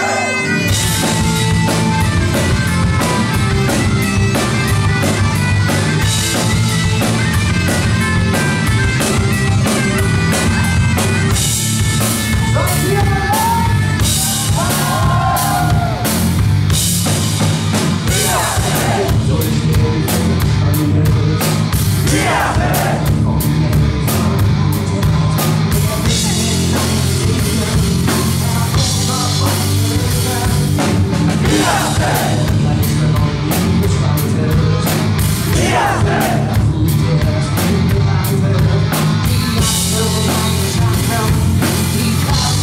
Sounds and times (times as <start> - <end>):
Music: 0.0 - 42.6.